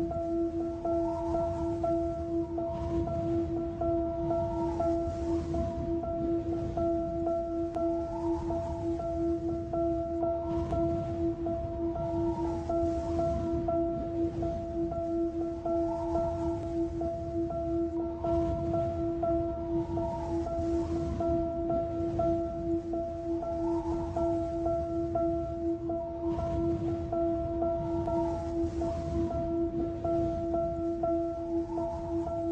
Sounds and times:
Music: 0.0s - 32.5s.

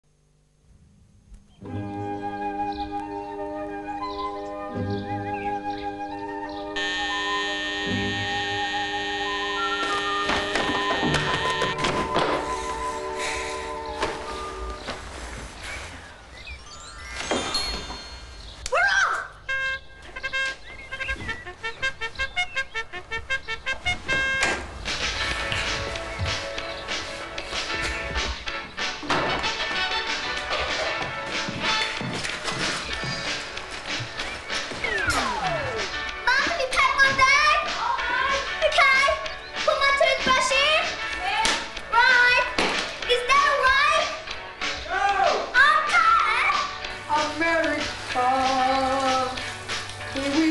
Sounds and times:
Music: 1.5s - 50.5s
Alarm: 6.8s - 12.1s.

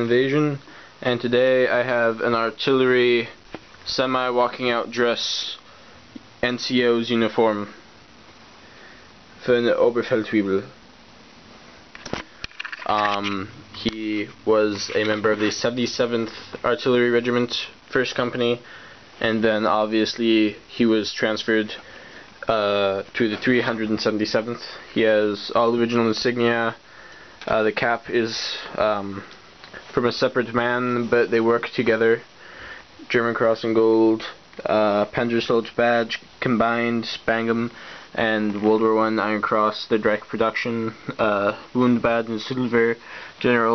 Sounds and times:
Speech: 0.0s - 5.7s, 6.4s - 7.8s, 9.4s - 10.8s, 12.8s - 21.8s, 22.4s - 26.8s, 27.4s - 29.3s, 29.9s - 32.3s, 33.0s - 43.7s
Inside, small room: 0.0s - 43.7s.

